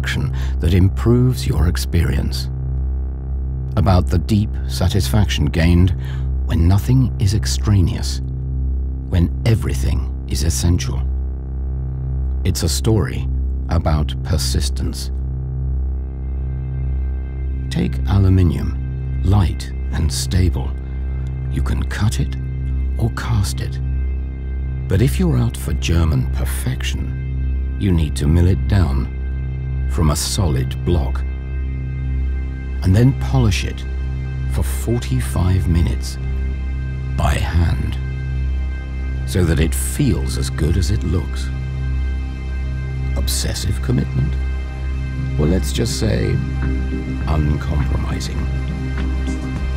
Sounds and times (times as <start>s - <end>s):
Speech: 0.0s - 2.5s, 3.8s - 8.2s, 9.1s - 11.1s, 12.5s - 15.1s, 17.7s - 20.8s, 21.5s - 22.4s, 23.0s - 23.8s, 24.9s - 27.2s, 27.8s - 29.1s, 29.9s - 31.2s, 32.8s - 33.9s, 34.5s - 36.2s, 37.2s - 38.0s, 39.3s - 41.5s, 43.2s - 44.4s, 45.4s - 46.5s, 47.2s - 48.5s
Music: 0.0s - 49.7s.